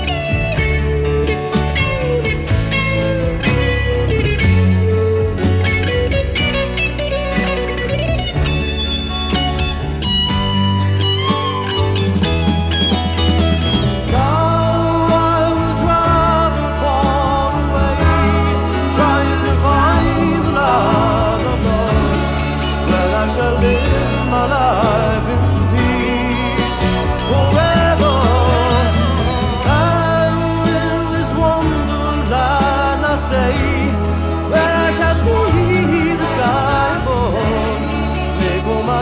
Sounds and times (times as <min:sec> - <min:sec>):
Blues: 0:00.0 - 0:39.0
Country: 0:00.0 - 0:39.0
Singing: 0:14.1 - 0:39.0.